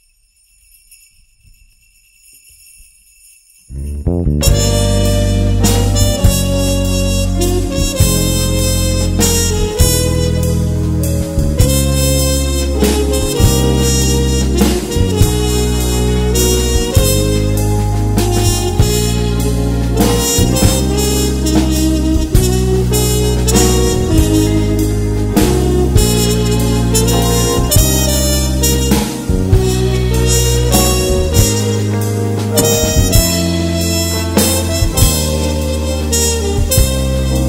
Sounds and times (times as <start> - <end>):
Music: 0.0 - 37.4.